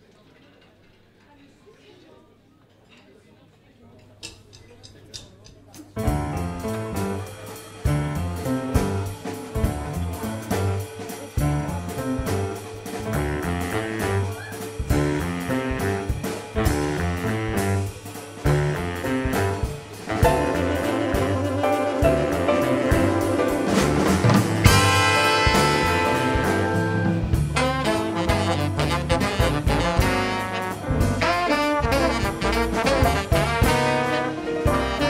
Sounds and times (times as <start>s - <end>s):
Orchestra: 6.0s - 35.0s.